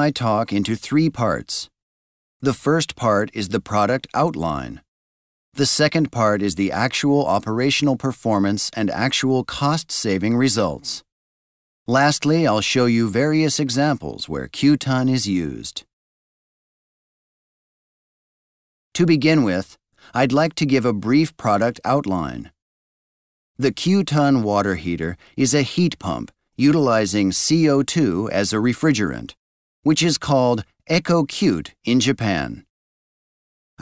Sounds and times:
Speech: 0:00.0 - 0:01.8, 0:02.4 - 0:04.9, 0:05.6 - 0:11.1, 0:11.9 - 0:15.9, 0:19.0 - 0:22.6, 0:23.6 - 0:32.7.

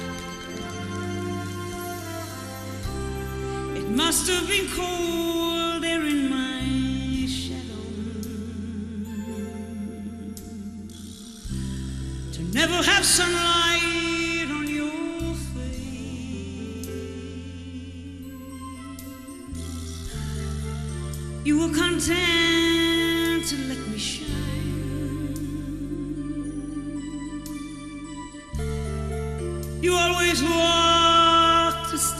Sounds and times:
Music: 0:00.0 - 0:32.1.

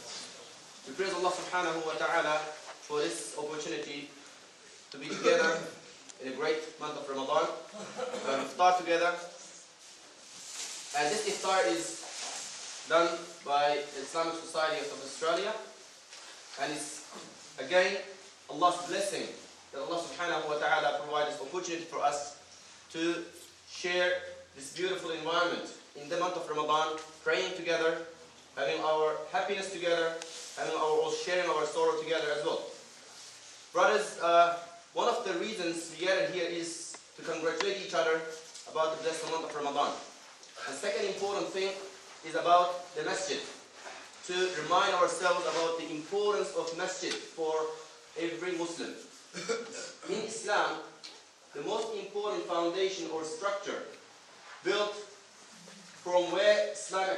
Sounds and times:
Narration, monologue: 0:00.0 - 0:57.1
Male speech, man speaking: 0:00.8 - 0:04.2, 0:05.0 - 0:09.4, 0:10.9 - 0:12.2, 0:12.9 - 0:15.8, 0:16.5 - 0:32.8, 0:33.8 - 0:43.6, 0:44.2 - 0:49.1, 0:49.8 - 0:54.0, 0:54.6 - 0:55.2, 0:56.0 - 0:57.1.

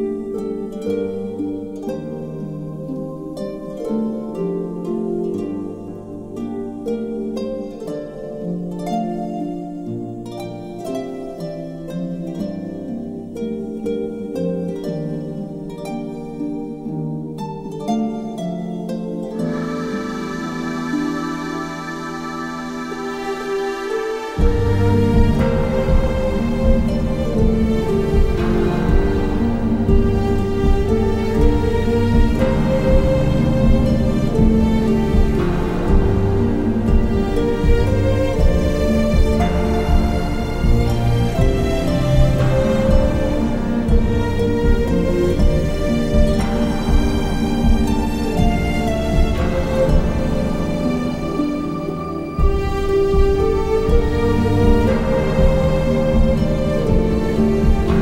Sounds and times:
Background music: 0:00.0 - 0:58.0
Tender music: 0:00.0 - 0:58.0.

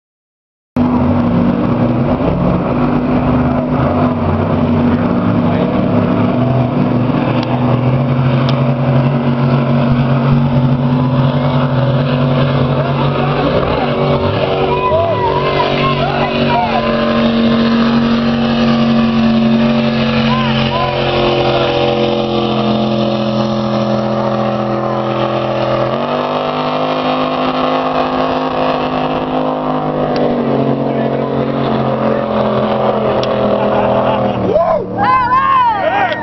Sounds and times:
Motorboat, speedboat: 0:00.8 - 0:36.2.

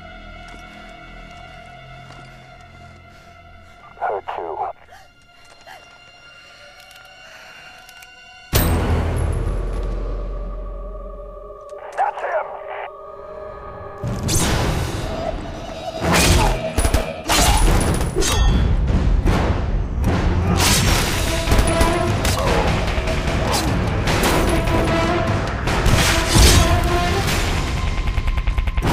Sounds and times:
Music: 0:00.0 - 0:28.9
Speech: 0:03.9 - 0:04.9, 0:11.8 - 0:12.9.

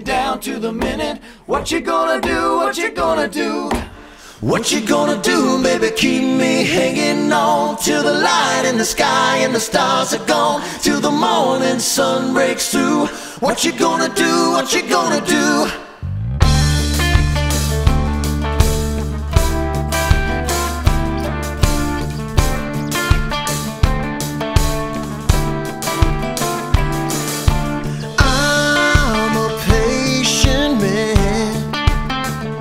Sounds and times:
New-age music: 0:15.9 - 0:31.0.

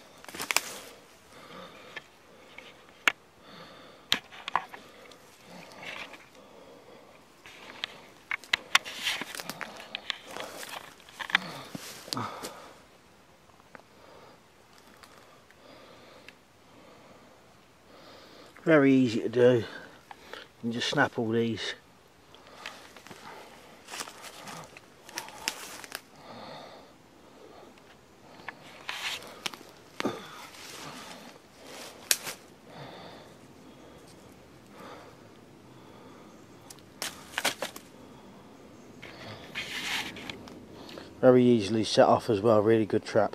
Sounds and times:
Outside, rural or natural: 0:00.0 - 0:43.3
Speech: 0:18.6 - 0:19.8, 0:20.6 - 0:21.8, 0:41.2 - 0:43.3.

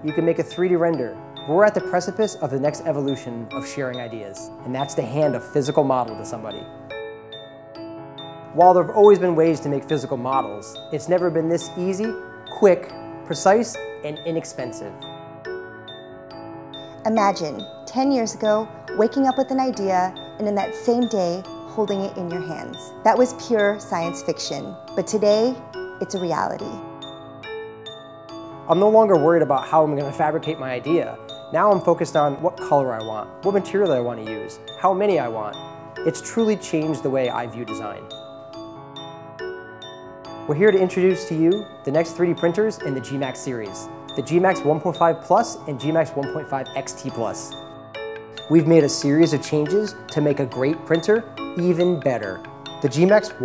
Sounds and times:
Music: 0:00.0 - 0:53.4.

